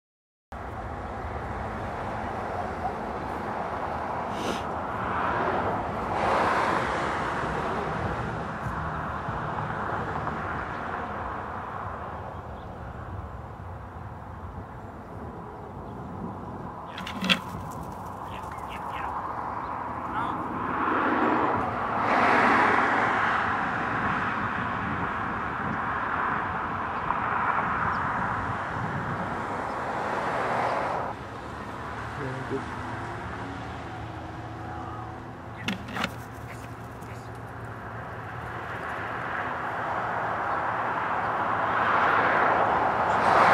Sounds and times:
Speech: 18.3 - 19.1, 20.1 - 20.4, 32.2 - 32.7, 36.5 - 37.4.

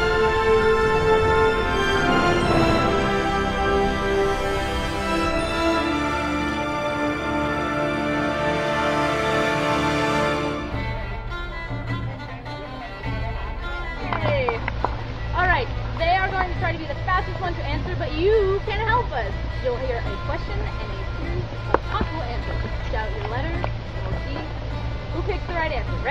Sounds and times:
Music: 0.0 - 26.1
Speech: 12.0 - 14.6, 15.4 - 24.5, 25.2 - 26.1.

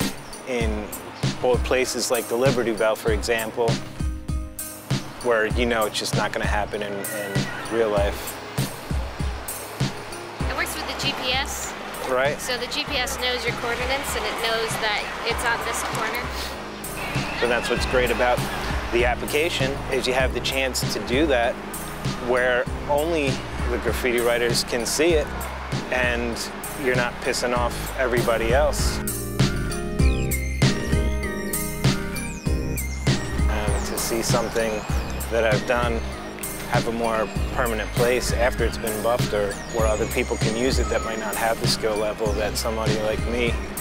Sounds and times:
Music: 0.0 - 43.8
Speech: 0.5 - 3.8, 5.2 - 8.2, 10.5 - 16.5, 17.4 - 21.5, 22.2 - 25.2, 25.9 - 29.0, 33.5 - 36.0, 36.7 - 43.6.

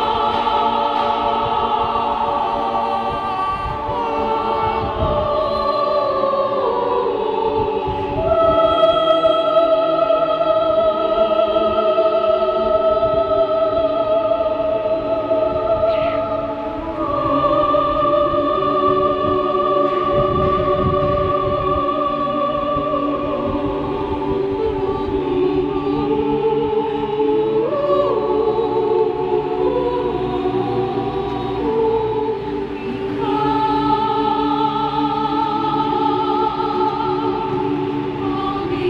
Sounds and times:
Choir: 0.0 - 38.8
Female singing: 0.0 - 38.8.

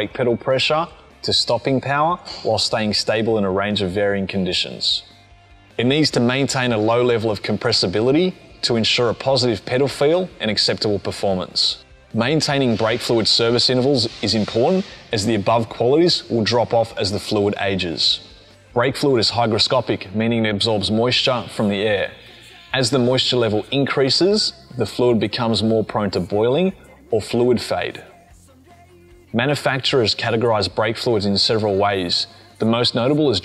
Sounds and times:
Speech: 0.0 - 5.1, 5.8 - 28.2, 29.3 - 33.4.

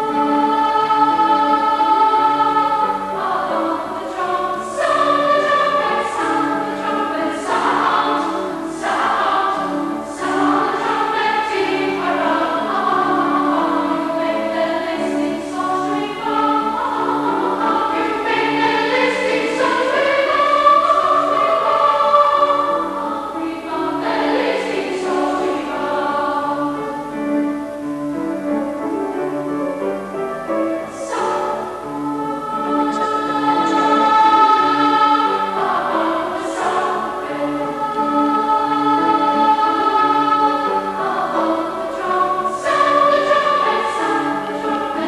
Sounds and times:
Tender music: 0.0 - 45.0.

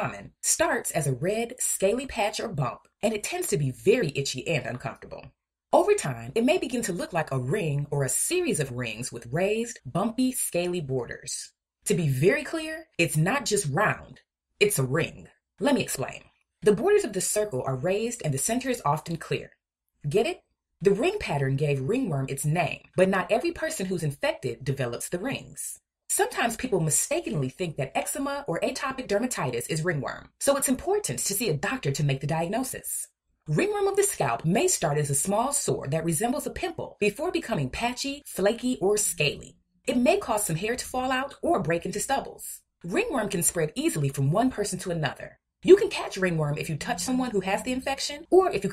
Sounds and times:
Narration, monologue: 0.0 - 48.7.

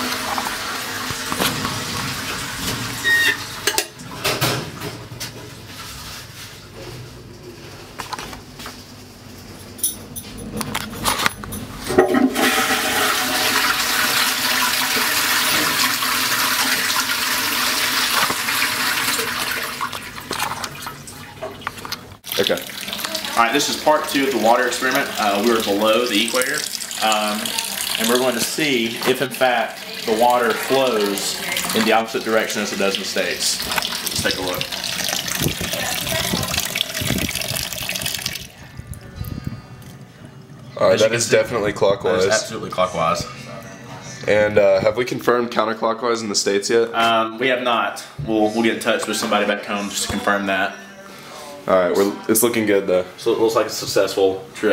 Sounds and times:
Water tap, faucet: 0.0 - 4.6, 12.2 - 38.6
Sink (filling or washing): 0.0 - 5.0, 12.0 - 38.6
Water: 14.7 - 39.0.

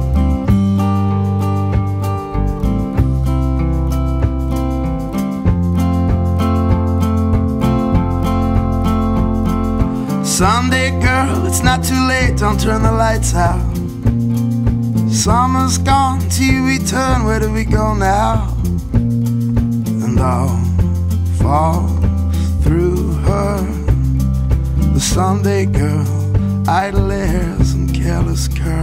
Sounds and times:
Music: 0.0 - 28.8.

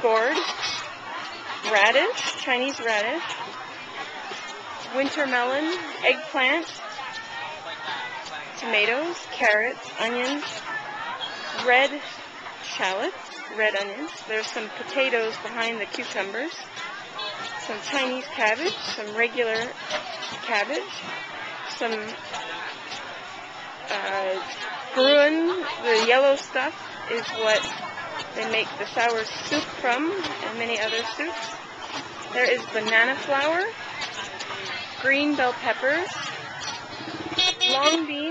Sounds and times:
Speech: 0.0 - 0.5, 1.2 - 23.0, 23.8 - 31.6, 32.3 - 36.8, 37.6 - 38.3.

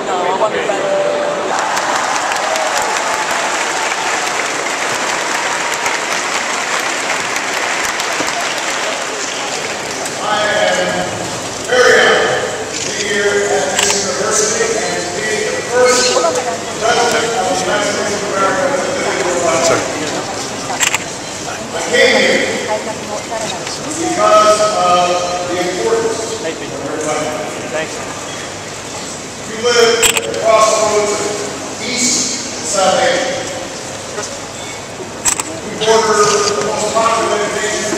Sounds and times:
Male speech, man speaking: 10.2 - 20.2, 21.5 - 22.7, 23.8 - 28.1, 29.5 - 33.6, 35.6 - 37.9.

